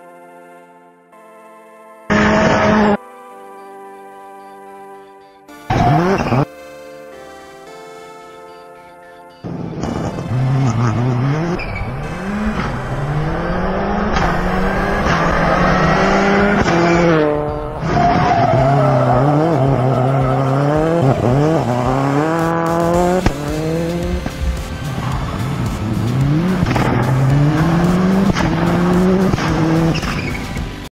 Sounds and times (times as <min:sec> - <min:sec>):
Music: 0:00.0 - 0:30.9
Accelerating, revving, vroom: 0:02.1 - 0:03.0, 0:05.7 - 0:06.5, 0:09.5 - 0:24.4, 0:25.0 - 0:30.8
Car: 0:02.1 - 0:03.0, 0:05.7 - 0:06.5, 0:09.4 - 0:30.9.